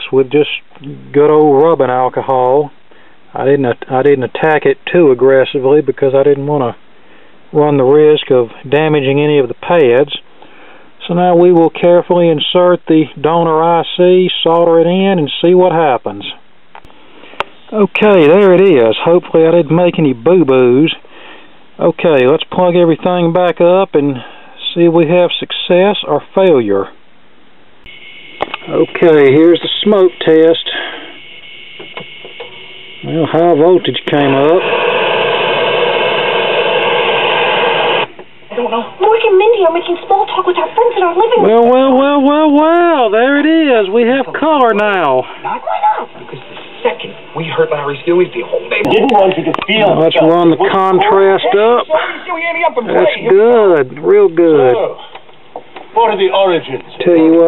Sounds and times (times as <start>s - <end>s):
Speech: 0.0s - 6.8s, 7.6s - 10.2s, 11.0s - 16.4s, 17.7s - 21.0s, 21.8s - 27.0s, 28.7s - 30.9s, 33.0s - 34.6s, 38.6s - 55.1s, 56.0s - 57.4s.